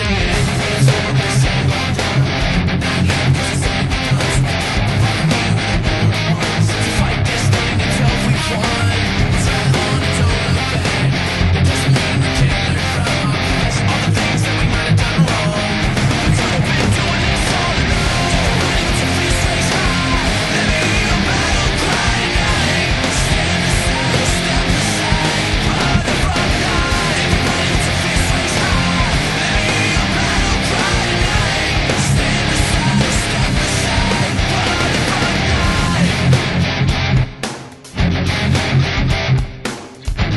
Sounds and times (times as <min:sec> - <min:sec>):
Guitar: 0:00.0 - 0:40.3.